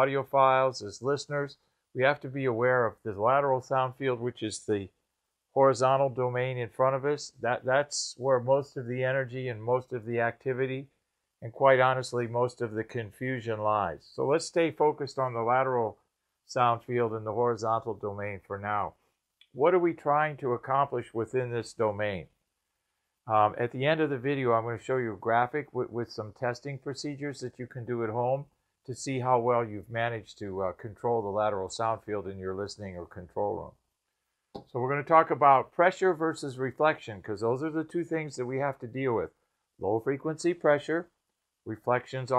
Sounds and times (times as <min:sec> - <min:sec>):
Speech: 0:00.0 - 0:05.0, 0:05.6 - 0:22.4, 0:23.3 - 0:33.8, 0:34.6 - 0:42.3.